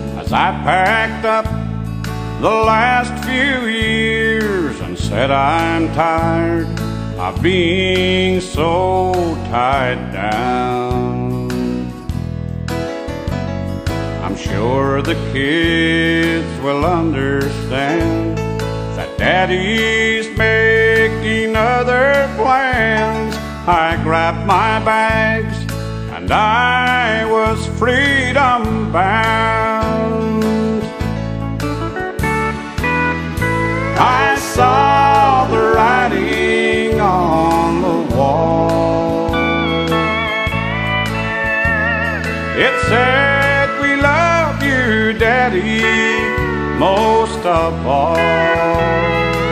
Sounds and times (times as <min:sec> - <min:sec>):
Music: 0:00.0 - 0:49.5.